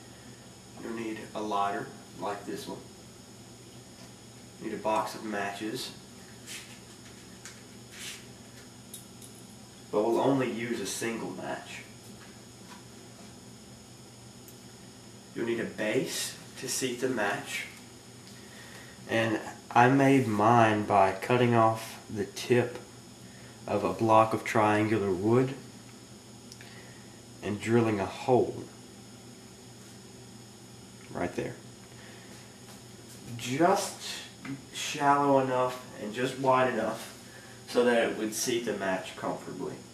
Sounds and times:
Speech: 0.8 - 2.9, 4.6 - 6.0, 10.0 - 11.9, 15.4 - 17.8, 19.1 - 22.8, 23.7 - 25.6, 27.4 - 28.7, 31.1 - 31.6, 33.3 - 37.1, 37.7 - 39.9.

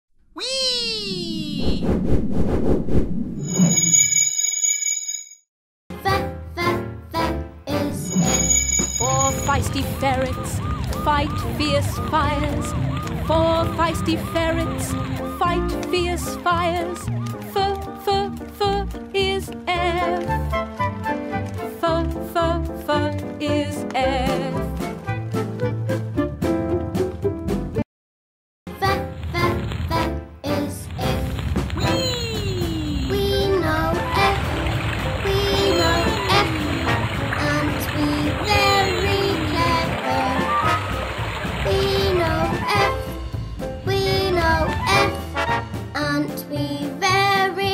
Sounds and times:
Speech: 0.4 - 1.8, 9.0 - 10.5, 31.8 - 33.3
Music: 5.9 - 27.8, 28.7 - 47.7.

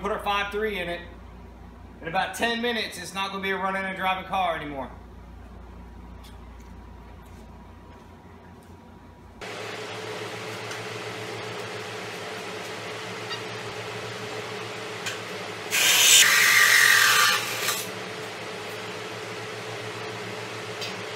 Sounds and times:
Speech: 0.0 - 1.2, 2.0 - 5.0.

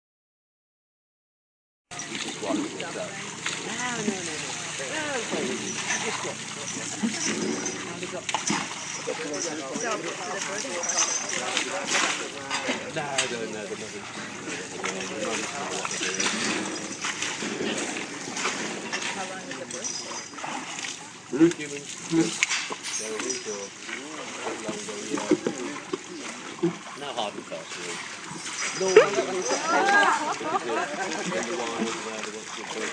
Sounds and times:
Water: 1.9 - 32.9
Splash, splatter: 2.0 - 32.9
Speech: 9.1 - 16.8, 28.8 - 32.9.

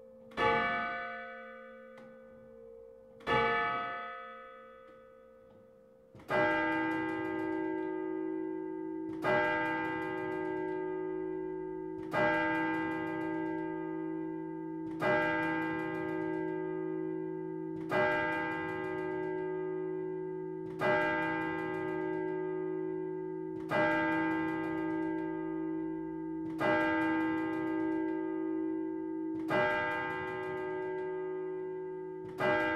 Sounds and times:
Bell: 0.0 - 32.7.

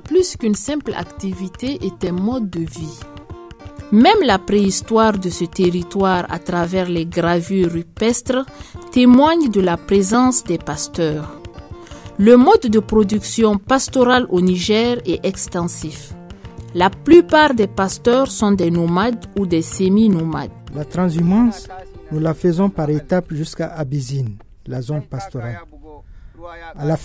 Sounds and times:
Music: 0.0 - 27.0
Speech: 0.1 - 3.0, 3.9 - 11.3, 12.2 - 16.1, 16.8 - 27.0.

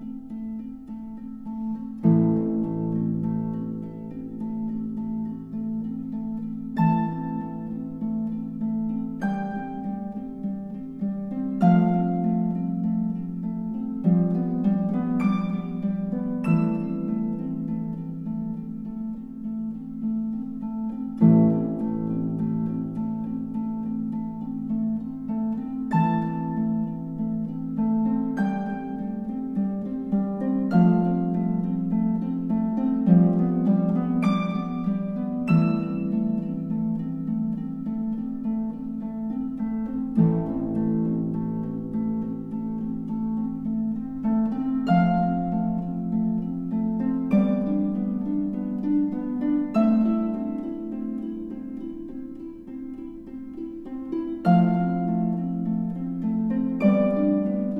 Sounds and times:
Music: 0.0 - 57.7.

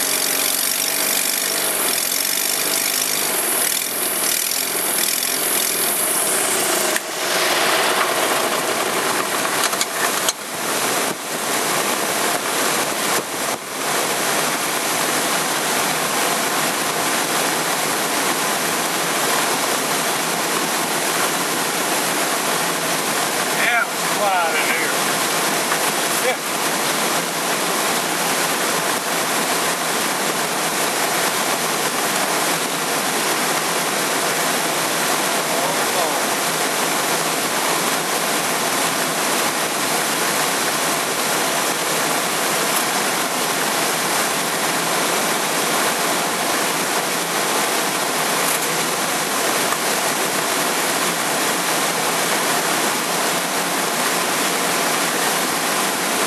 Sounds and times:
Aircraft: 5.8 - 56.2
Speech: 23.6 - 25.0, 26.2 - 26.5, 35.5 - 36.3.

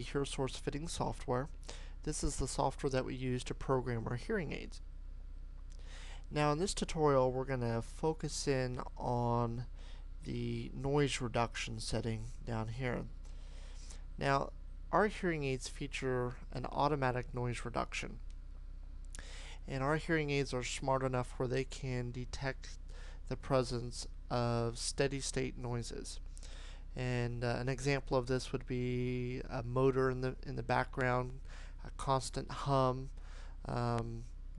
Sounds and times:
Speech: 0.0 - 4.8, 6.3 - 13.2, 14.2 - 18.2, 19.7 - 26.2, 27.0 - 34.3.

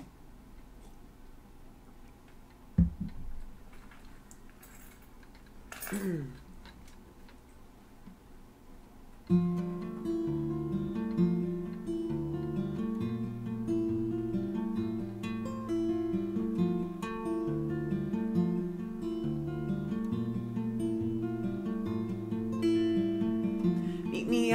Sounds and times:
Music: 9.3 - 24.5.

